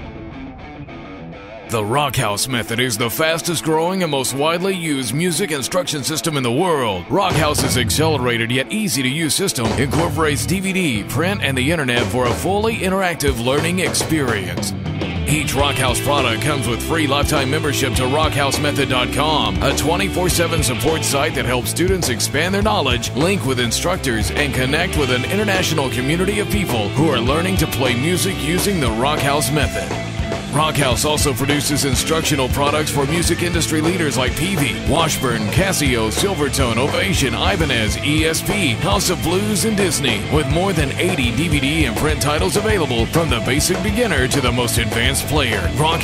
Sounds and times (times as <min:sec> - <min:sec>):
Rock and roll: 0:00.0 - 0:46.0
Speech: 0:01.7 - 0:46.0.